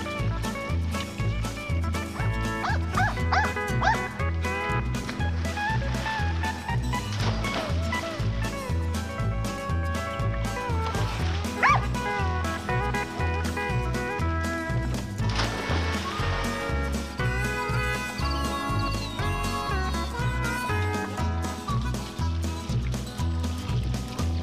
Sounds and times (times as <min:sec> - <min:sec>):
Music: 0:00.0 - 0:24.4
Bow-wow: 0:02.6 - 0:04.1, 0:11.6 - 0:12.0.